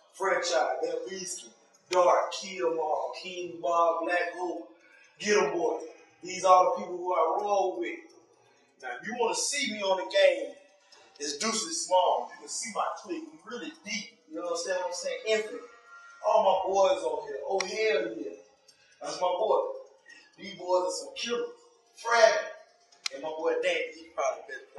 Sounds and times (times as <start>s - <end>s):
Speech: 0.0s - 8.1s, 8.8s - 10.6s, 11.2s - 18.4s, 19.0s - 19.8s, 20.4s - 24.7s.